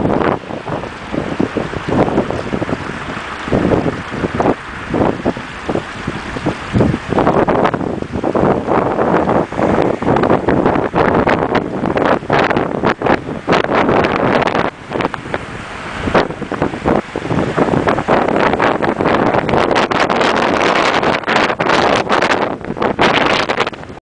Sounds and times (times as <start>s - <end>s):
Stream: 0.0s - 24.0s.